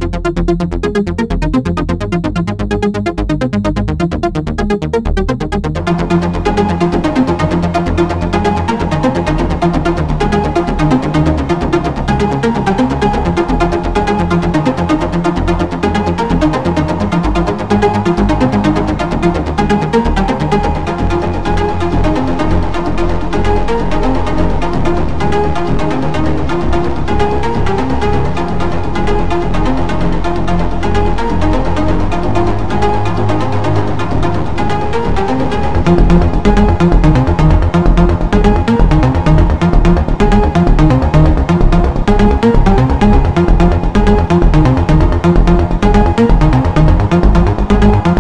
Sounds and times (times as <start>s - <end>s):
Electronica: 0.0s - 48.2s
Trance music: 0.0s - 48.2s.